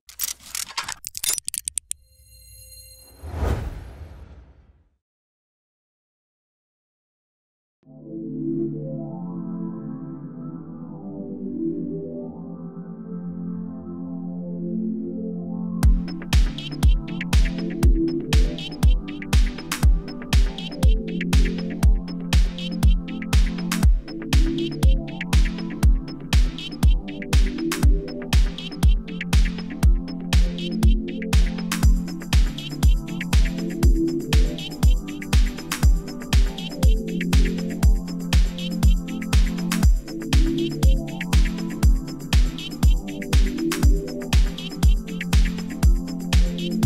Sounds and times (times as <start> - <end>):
Music: 7.8 - 46.8.